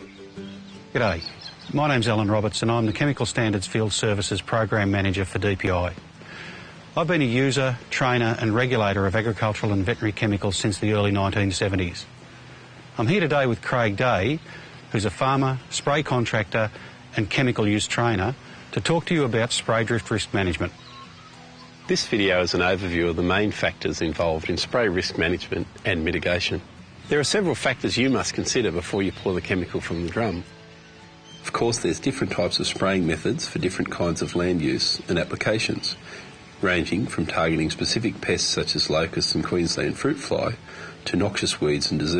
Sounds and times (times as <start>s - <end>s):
Music: 0.0s - 42.1s
Speech: 1.0s - 6.0s, 7.0s - 12.1s, 13.0s - 20.8s, 21.9s - 30.5s, 31.4s - 36.0s, 36.6s - 42.1s.